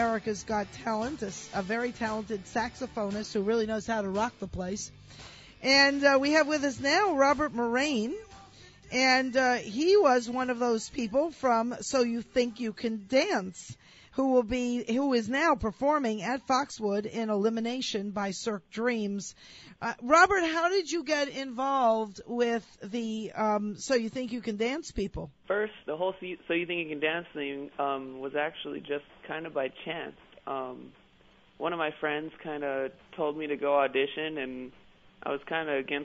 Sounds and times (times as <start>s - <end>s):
Music: 0.0s - 13.6s
Speech: 8.9s - 31.0s, 31.6s - 36.0s.